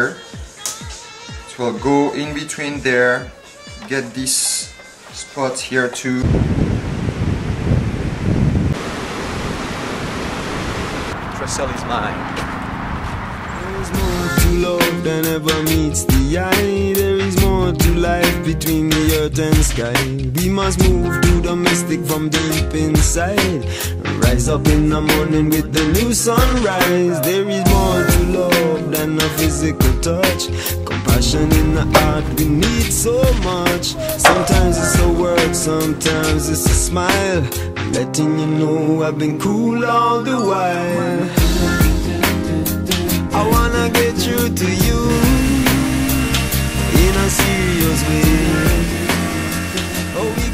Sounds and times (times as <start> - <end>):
Music: 0.0 - 6.2, 14.0 - 50.5
Speech: 1.5 - 6.2, 11.4 - 12.2
Waves, surf: 6.9 - 11.3.